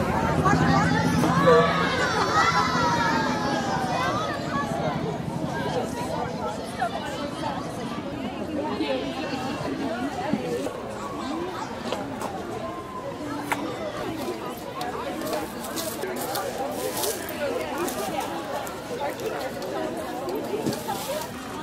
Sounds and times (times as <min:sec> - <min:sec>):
Speech: 0:00.0 - 0:21.6.